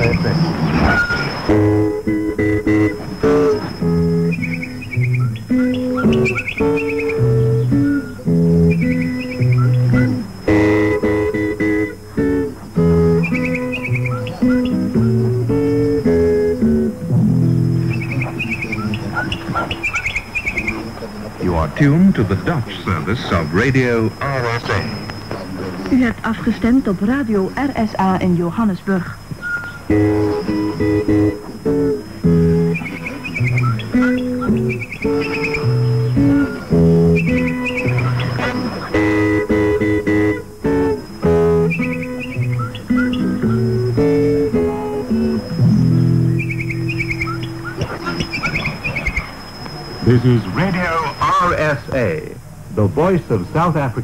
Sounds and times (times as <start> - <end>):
Speech: 0.0 - 0.4, 20.6 - 29.2
Music: 1.1 - 28.4, 29.7 - 49.0.